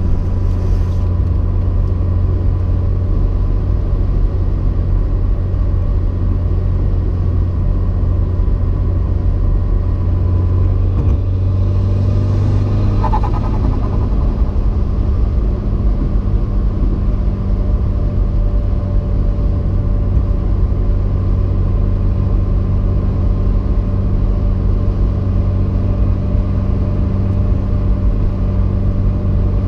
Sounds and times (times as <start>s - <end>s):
Race car, auto racing: 0.0s - 29.6s.